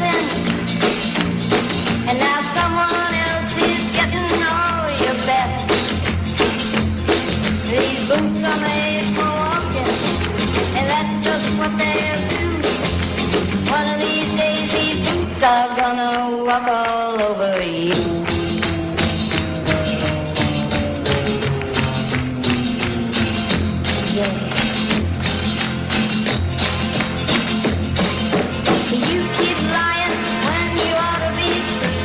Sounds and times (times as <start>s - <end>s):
Music: 0.0s - 32.0s.